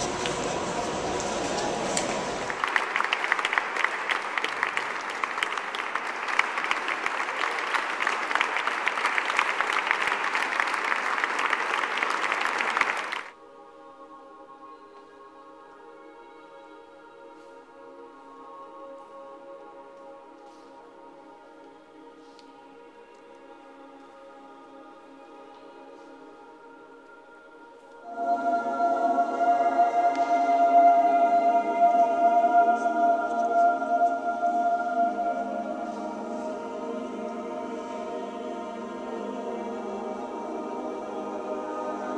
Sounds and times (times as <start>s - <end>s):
Choir: 0.0s - 42.1s.